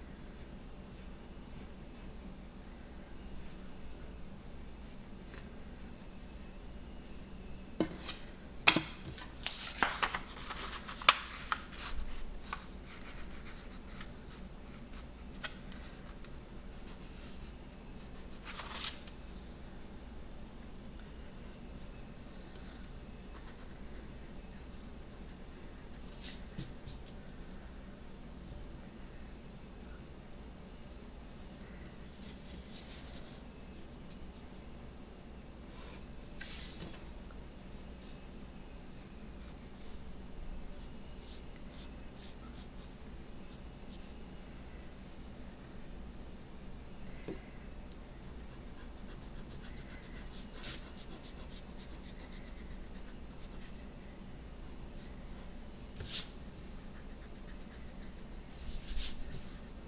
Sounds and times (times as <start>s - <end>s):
Inside, small room: 0.0s - 59.8s.